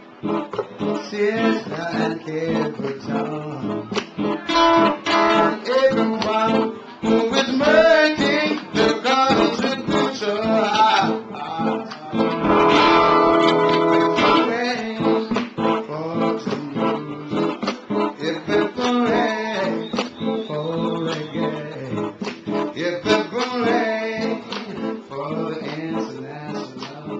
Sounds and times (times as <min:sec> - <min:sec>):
Guitar: 0:00.0 - 0:27.1
Reggae: 0:00.0 - 0:27.1.